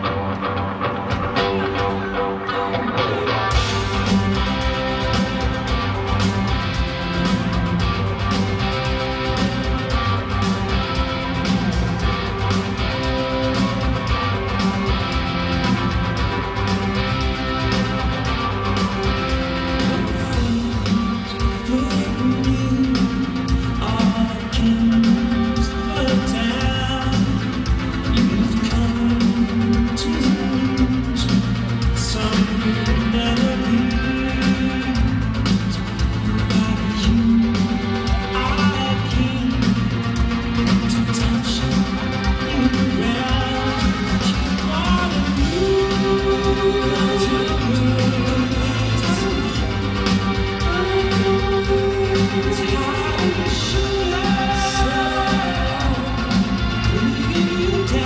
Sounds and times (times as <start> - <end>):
Music: 0.0 - 58.0.